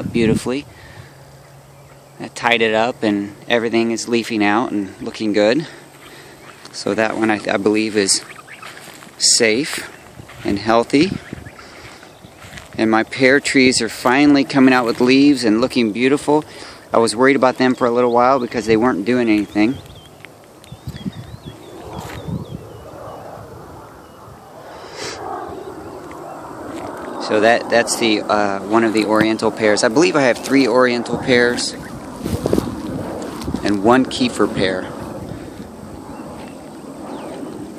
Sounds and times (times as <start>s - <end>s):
Speech: 0.0s - 0.7s, 2.2s - 5.8s, 6.7s - 8.3s, 9.2s - 11.2s, 12.8s - 19.8s, 27.2s - 31.9s, 33.6s - 35.0s
Outside, rural or natural: 0.0s - 37.7s.